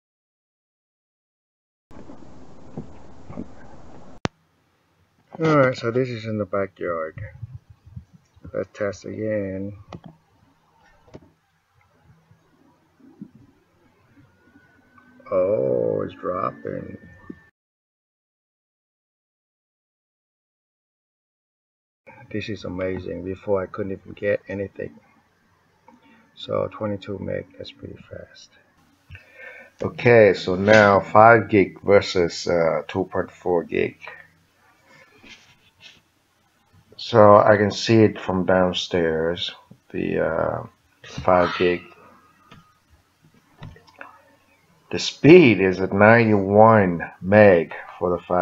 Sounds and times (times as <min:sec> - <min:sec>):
Speech: 0:05.4 - 0:07.6, 0:08.5 - 0:09.8, 0:15.3 - 0:17.1, 0:22.1 - 0:25.0, 0:26.4 - 0:28.6, 0:29.8 - 0:34.3, 0:37.0 - 0:42.0, 0:44.9 - 0:48.4.